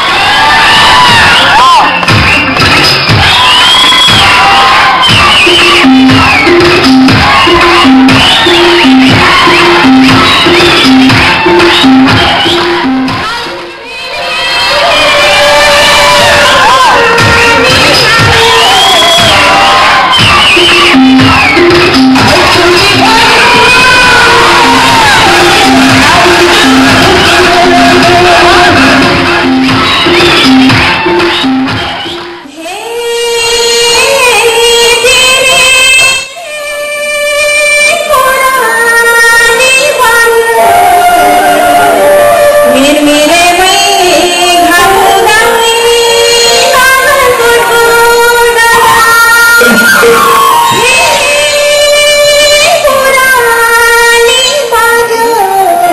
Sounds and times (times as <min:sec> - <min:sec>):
Music: 0:00.0 - 0:55.9
Female singing: 0:13.1 - 0:21.6, 0:22.2 - 0:29.4, 0:32.5 - 0:55.9.